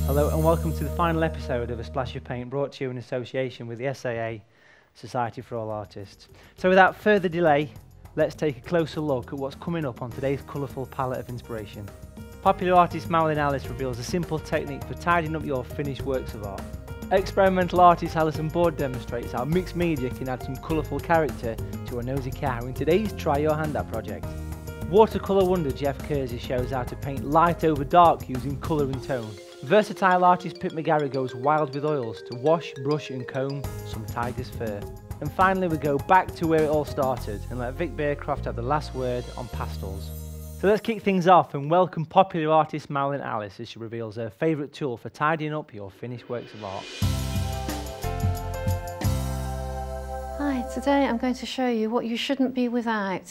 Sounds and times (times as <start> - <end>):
Music: 0.0 - 3.2, 5.2 - 43.0, 45.9 - 53.3
Speech: 0.1 - 4.4, 5.0 - 11.9, 12.5 - 24.2, 24.8 - 47.0, 50.4 - 53.3.